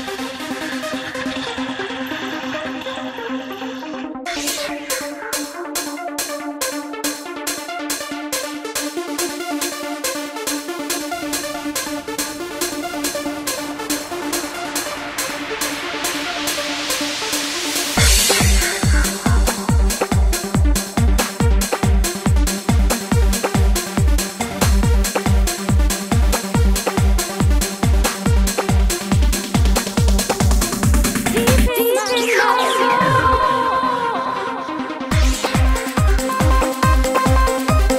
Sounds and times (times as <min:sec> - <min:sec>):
Music: 0:00.0 - 0:37.9.